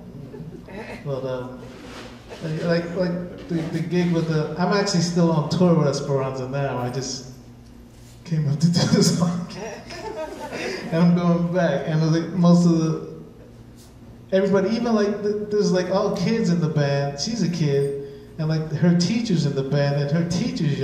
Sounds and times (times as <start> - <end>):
Speech: 0.7 - 1.6, 2.3 - 7.3, 8.2 - 10.0, 10.9 - 13.2, 14.3 - 20.8.